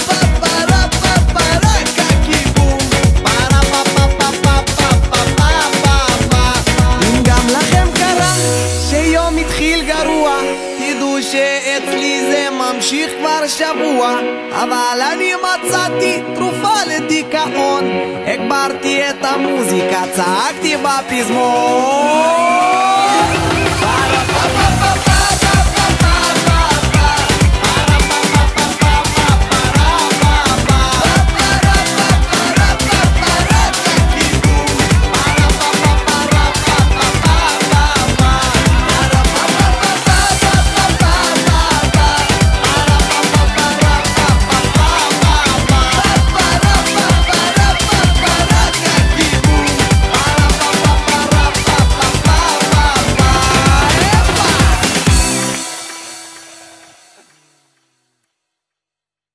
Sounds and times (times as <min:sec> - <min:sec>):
Pop music: 0:00.0 - 0:57.5
Dance music: 0:00.0 - 0:57.8.